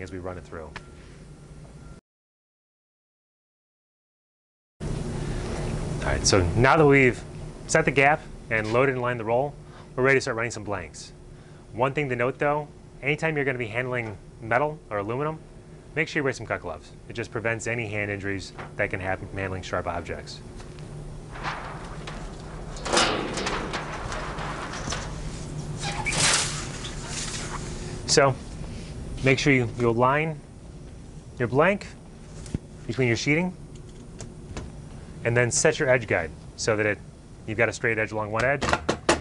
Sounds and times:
Speech: 0.0s - 0.8s, 6.0s - 15.4s, 16.0s - 20.4s, 28.1s - 28.4s, 29.2s - 30.4s, 31.4s - 32.0s, 32.9s - 33.6s, 35.2s - 38.7s.

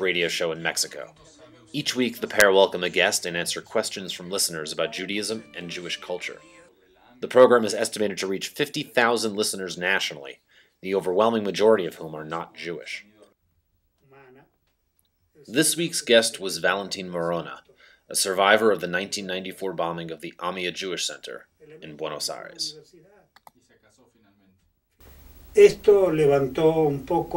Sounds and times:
Speech: 0.0s - 13.4s, 14.0s - 14.6s, 15.4s - 24.6s, 25.6s - 27.3s.

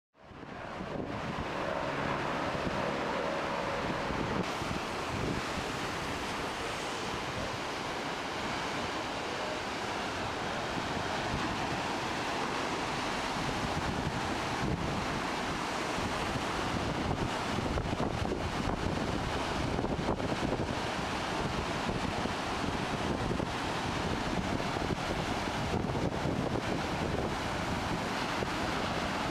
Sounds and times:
Waves, surf: 0.2s - 29.3s.

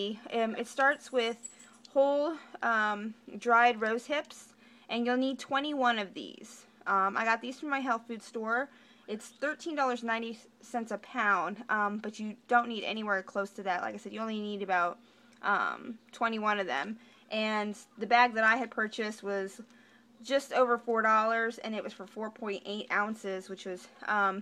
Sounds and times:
Speech: 0.0s - 24.4s.

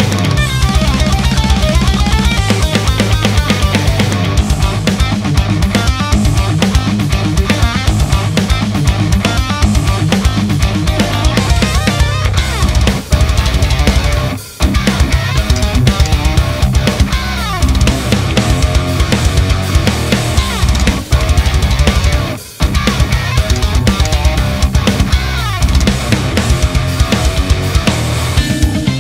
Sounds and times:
Music: 0.0s - 29.0s.

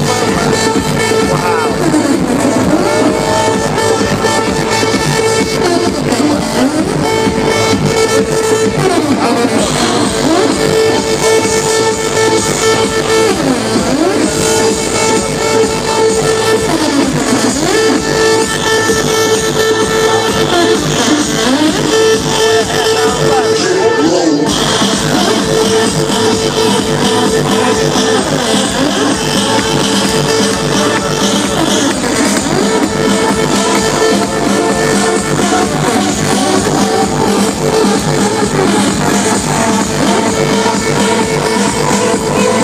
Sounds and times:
Dance music: 0.0s - 42.6s
Speech: 22.9s - 24.5s.

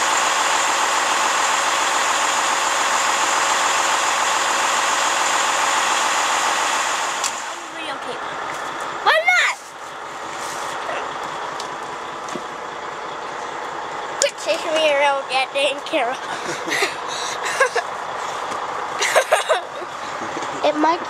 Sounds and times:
Truck: 0.0s - 21.1s.

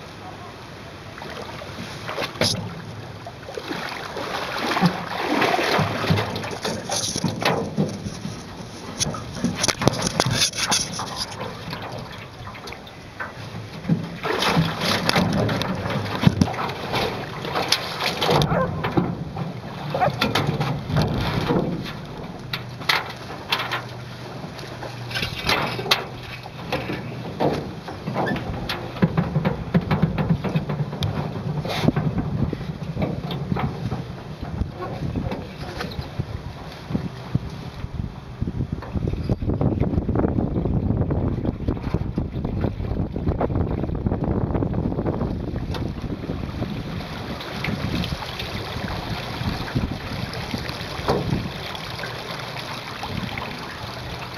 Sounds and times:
Rowboat, canoe, kayak: 0.0s - 54.3s.

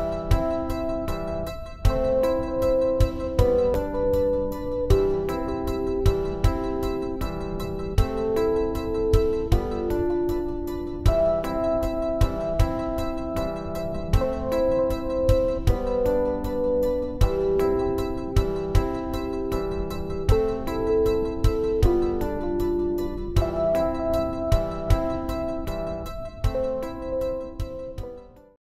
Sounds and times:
Music: 0.0s - 28.6s.

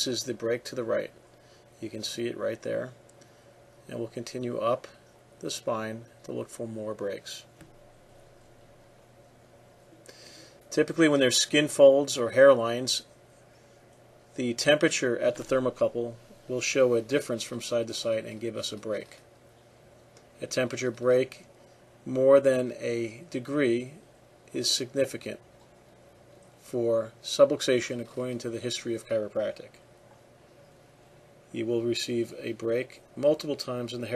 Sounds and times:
Speech: 0.0s - 1.2s, 1.8s - 3.0s, 3.8s - 7.6s, 10.7s - 13.1s, 14.4s - 19.3s, 20.4s - 25.5s, 26.6s - 29.8s, 31.5s - 34.1s.

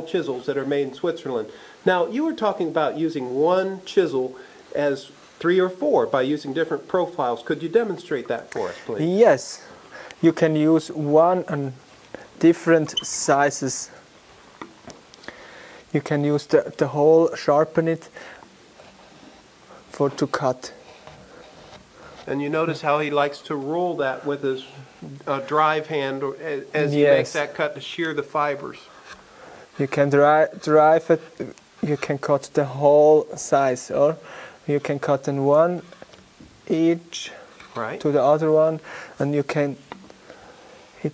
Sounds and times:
Speech: 0.0s - 11.8s, 12.4s - 14.0s, 15.9s - 18.1s, 19.9s - 20.8s, 22.3s - 28.9s, 29.8s - 35.9s, 36.7s - 39.8s.

